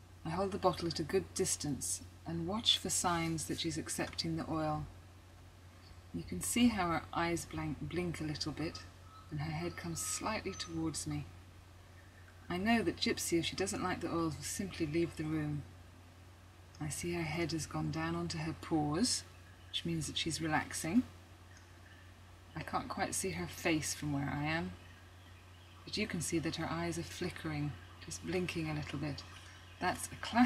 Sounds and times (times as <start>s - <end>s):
Speech: 0.2s - 4.9s, 6.2s - 11.3s, 12.5s - 15.7s, 16.8s - 21.1s, 22.6s - 24.8s, 25.9s - 30.4s.